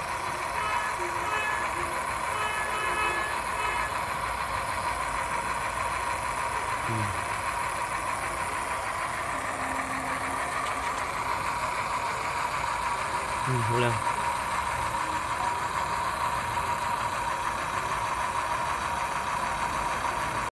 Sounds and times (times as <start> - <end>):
Vehicle: 0.0 - 20.5
Speech: 6.6 - 7.2, 13.4 - 14.1.